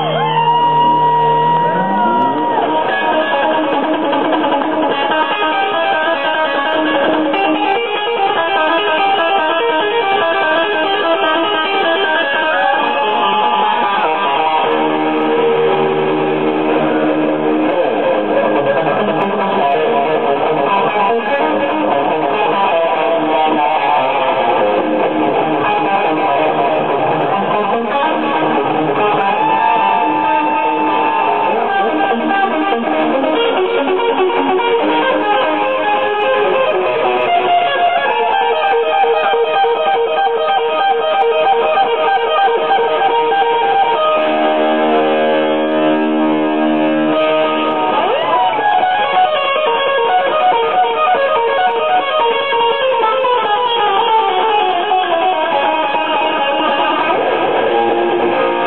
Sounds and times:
Electric guitar: 0.0s - 58.6s.

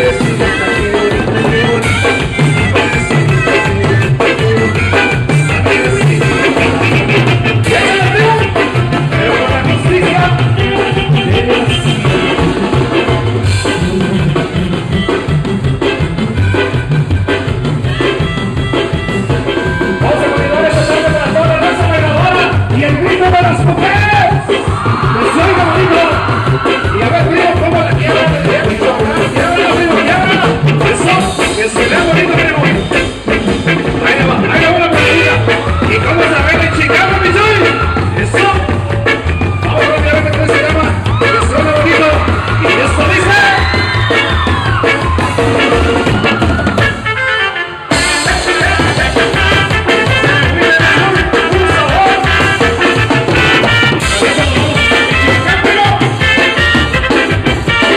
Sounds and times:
Music: 0.0s - 57.9s.

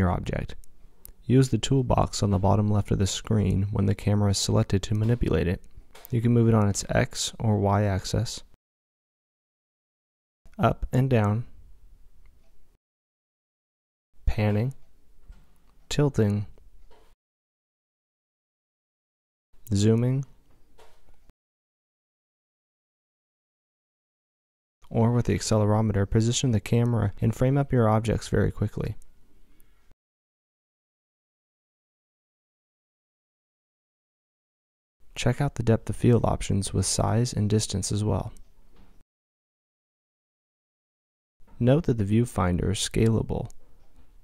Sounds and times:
Speech: 0.0s - 0.6s, 1.2s - 8.6s, 10.5s - 11.6s, 14.2s - 14.8s, 15.9s - 16.6s, 19.7s - 20.3s, 24.8s - 29.0s, 35.2s - 38.4s, 41.6s - 43.6s.

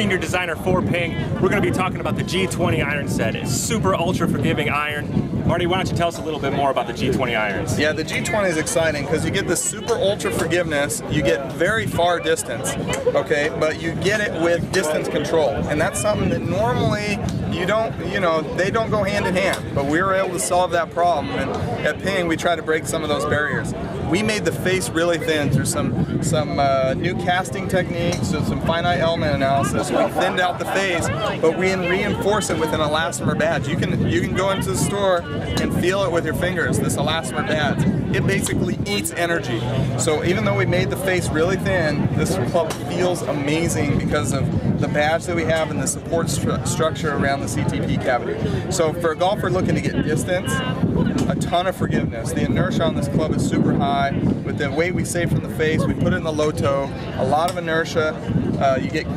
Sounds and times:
Speech: 0.0s - 59.1s.

